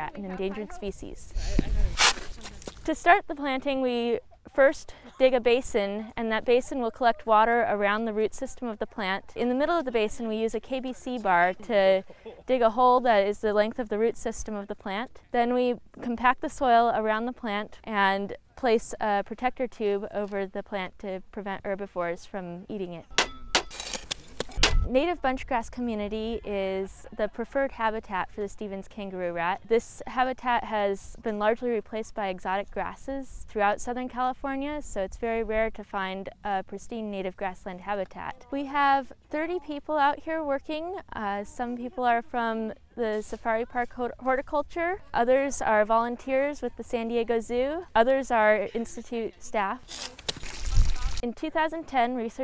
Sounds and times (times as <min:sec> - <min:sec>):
Speech: 0:00.0 - 0:23.0, 0:24.9 - 0:52.4.